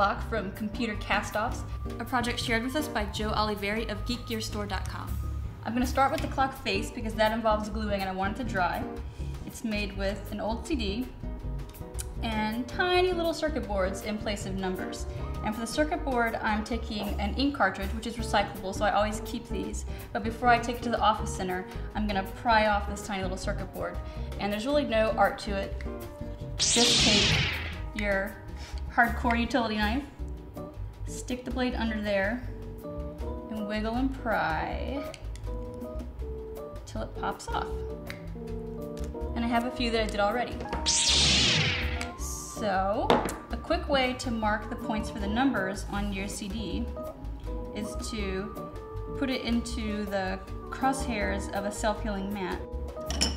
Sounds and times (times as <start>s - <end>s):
Music: 0.0s - 53.3s
Speech: 12.2s - 25.7s, 28.0s - 28.4s, 33.5s - 35.1s, 36.9s - 37.8s, 39.4s - 40.6s, 42.2s - 46.9s.